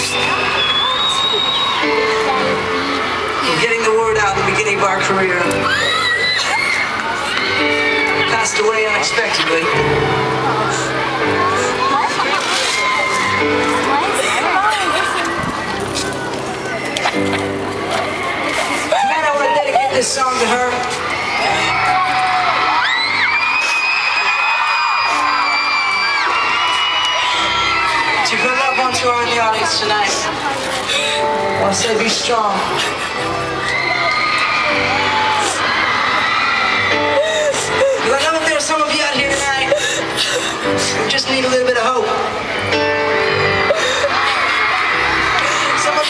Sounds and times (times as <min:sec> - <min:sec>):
Music: 0:00.0 - 0:46.0.